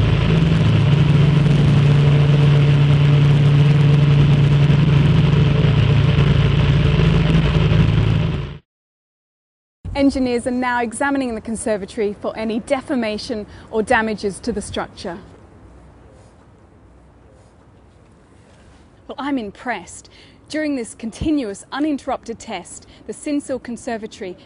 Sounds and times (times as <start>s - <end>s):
Wind: 0.0s - 8.6s, 9.9s - 24.4s
Speech: 10.0s - 15.3s, 19.1s - 24.4s.